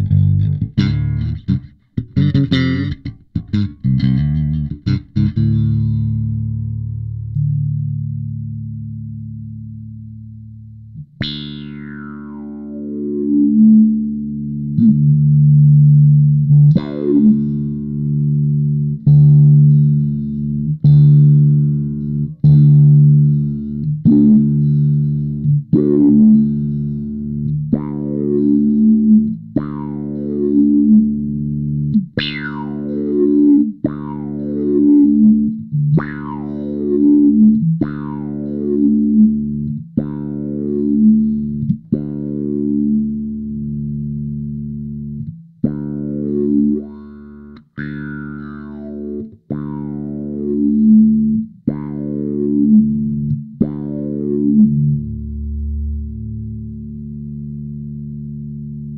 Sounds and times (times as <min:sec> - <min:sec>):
Effects unit: 0:00.0 - 0:58.9.